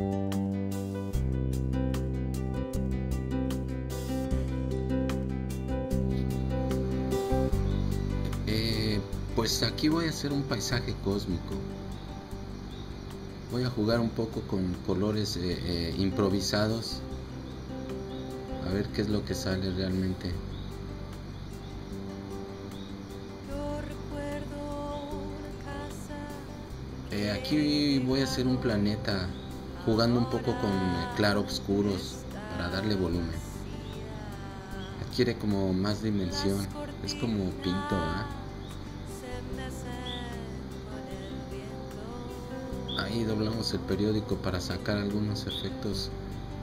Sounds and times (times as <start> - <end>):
Music: 0.0 - 46.6
Speech: 8.5 - 11.6, 13.6 - 17.0, 18.6 - 20.4, 27.1 - 33.5, 35.0 - 38.4, 42.9 - 46.1.